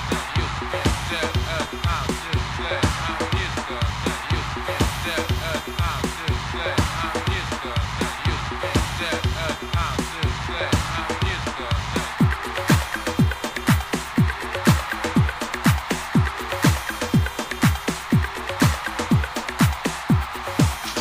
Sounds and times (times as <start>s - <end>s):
Music: 0.0s - 21.0s.